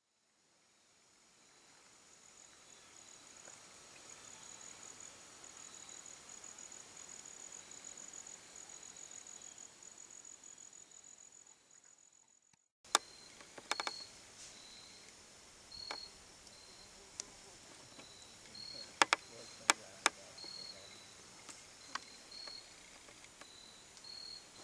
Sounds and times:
Outside, rural or natural: 0.0s - 24.6s.

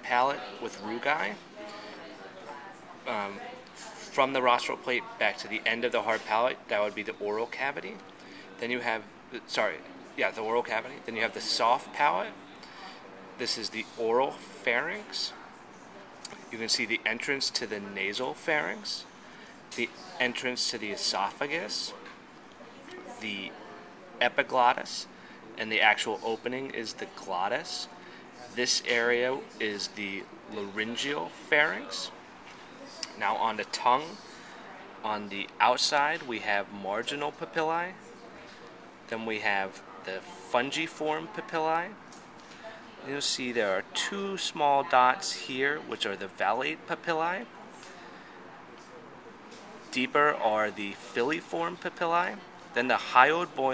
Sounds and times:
Speech: 0.0s - 19.1s, 19.7s - 32.2s, 32.8s - 53.7s.

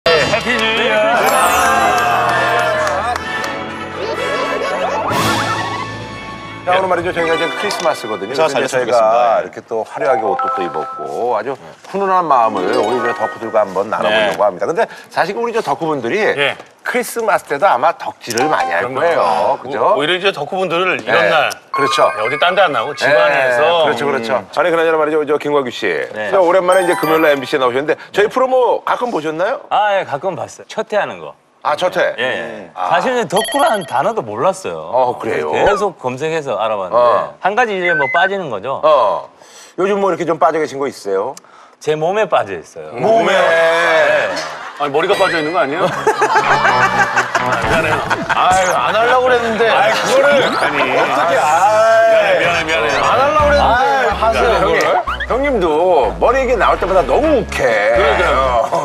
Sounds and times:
Inside, large room or hall: 0.1s - 8.0s
Music: 1.1s - 8.9s, 12.6s - 14.0s, 21.8s - 23.6s, 26.8s - 27.9s, 45.2s - 48.3s, 53.3s - 58.8s.

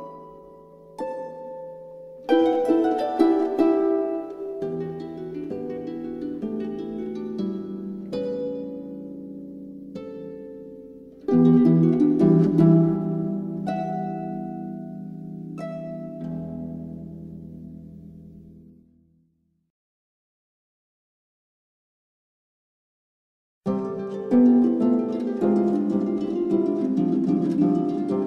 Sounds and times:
Classical music: 0.0s - 18.8s, 23.7s - 28.2s.

